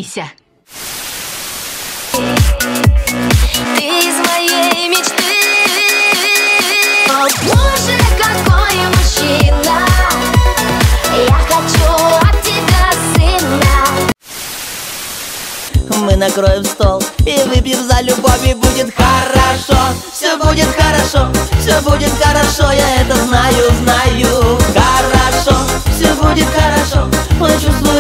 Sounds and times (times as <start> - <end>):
Dance music: 2.1 - 14.2, 15.7 - 28.0
Pop music: 2.1 - 14.2, 15.7 - 28.0.